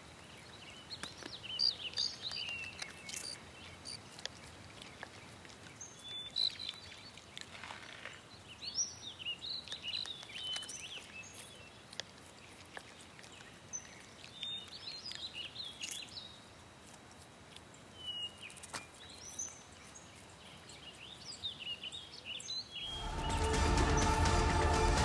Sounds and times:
Chirp, tweet: 0.1 - 4.1, 4.8 - 11.8, 12.4 - 16.4, 17.9 - 23.4.

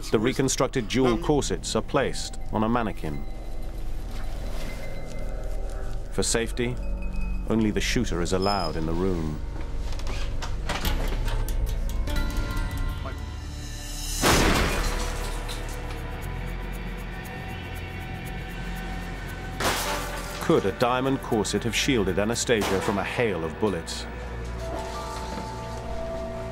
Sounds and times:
Speech: 0.0 - 3.2, 6.2 - 6.8, 7.5 - 9.4, 20.4 - 24.1
Music: 0.0 - 26.5.

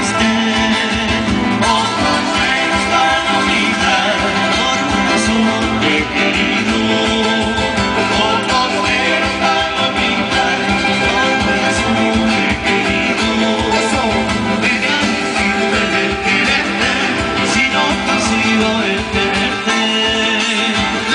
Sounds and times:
Country: 0.0 - 21.1.

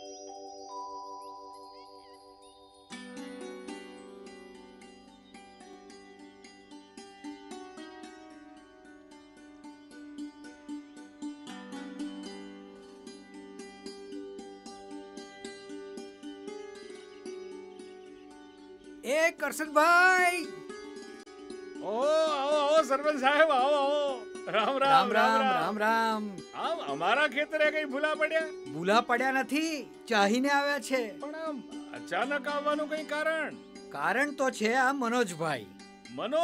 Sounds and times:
Music: 0.0 - 36.4
Speech: 19.0 - 20.5, 21.8 - 36.4.

